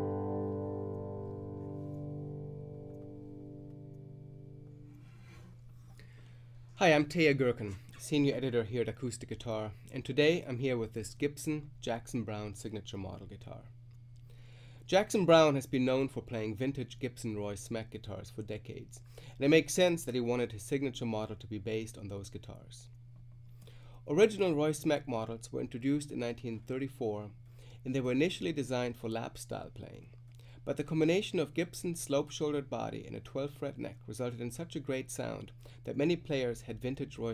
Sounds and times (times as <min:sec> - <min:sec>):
Speech: 0:06.8 - 0:13.8, 0:14.9 - 0:22.9, 0:24.1 - 0:37.3.